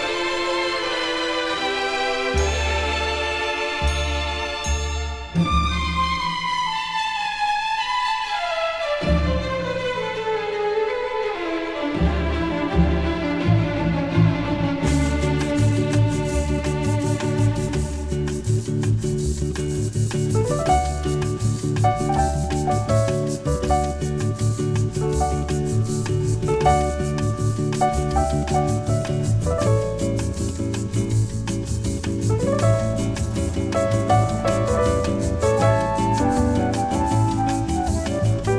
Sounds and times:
Orchestra: 0.0s - 38.5s.

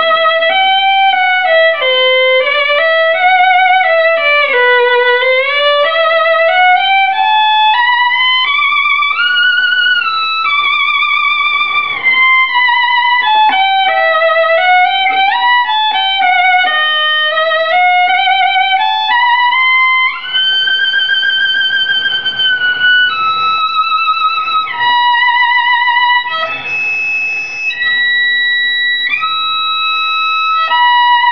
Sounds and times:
Violin, fiddle: 0.0s - 31.3s.

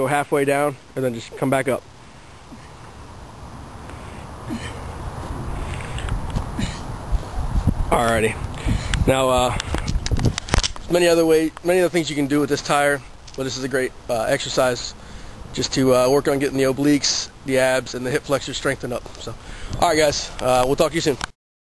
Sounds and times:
Speech: 0.0s - 1.8s, 7.9s - 8.4s, 9.1s - 9.6s, 10.9s - 15.0s, 15.6s - 21.3s.

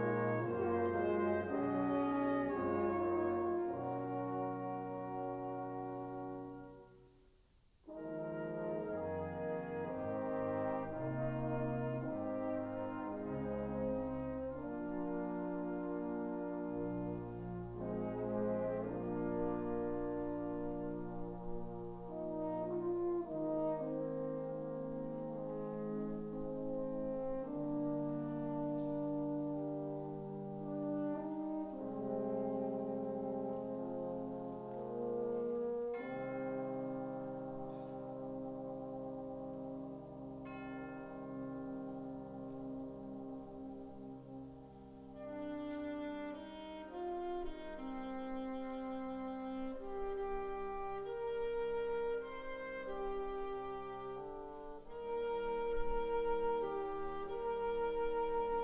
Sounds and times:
Orchestra: 0.0s - 58.6s.

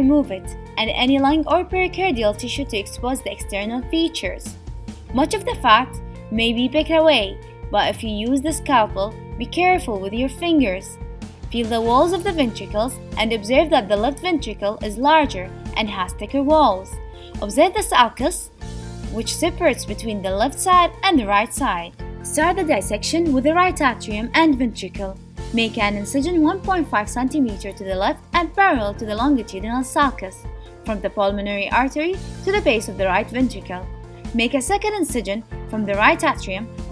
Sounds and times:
Speech: 0.0s - 18.5s, 19.1s - 36.7s
Music: 0.0s - 36.9s.

